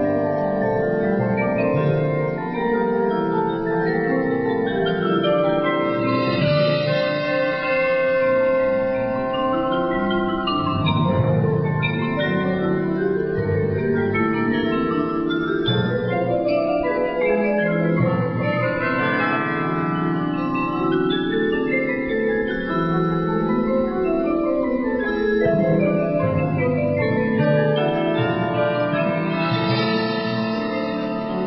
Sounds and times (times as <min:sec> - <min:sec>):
Glockenspiel: 0:00.0 - 0:31.4
Marimba, xylophone: 0:00.0 - 0:31.4.